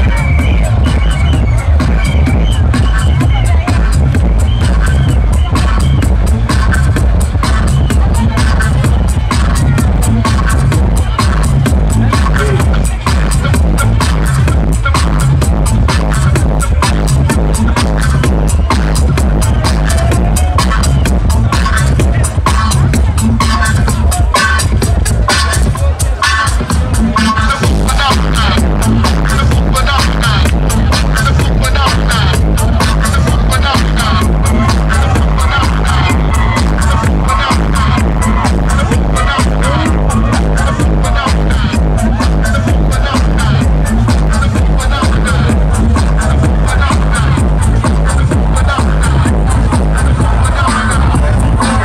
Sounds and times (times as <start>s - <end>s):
Techno: 0.0s - 51.8s.